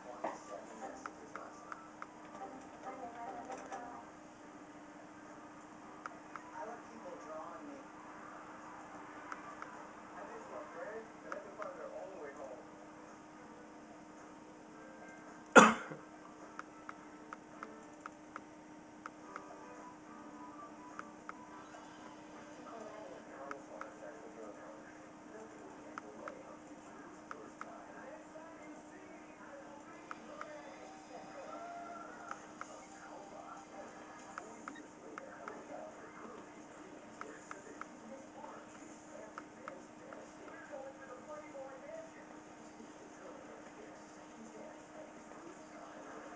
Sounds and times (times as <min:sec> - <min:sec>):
Speech: 0:00.0 - 0:01.9, 0:02.5 - 0:04.1, 0:09.4 - 0:12.7, 0:22.5 - 0:46.3.